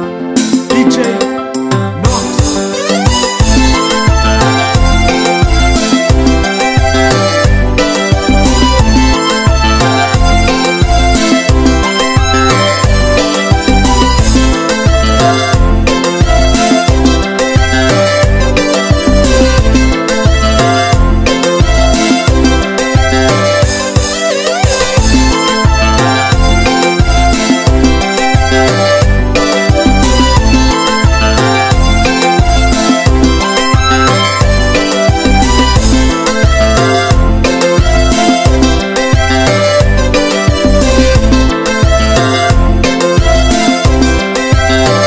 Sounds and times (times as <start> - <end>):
Music: 0.0 - 45.0.